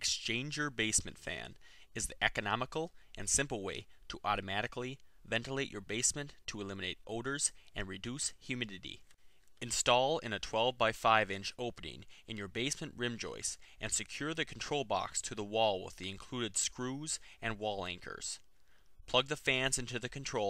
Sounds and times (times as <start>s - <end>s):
Narration, monologue: 0.0s - 20.5s.